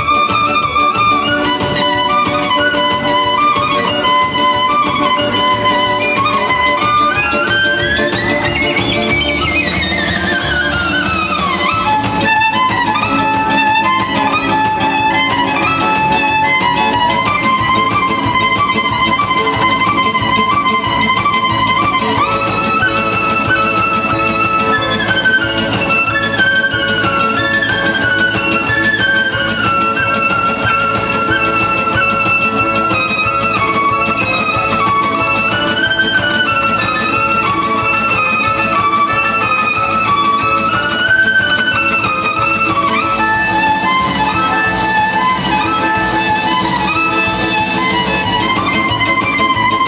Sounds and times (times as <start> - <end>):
Exciting music: 0.0 - 49.8.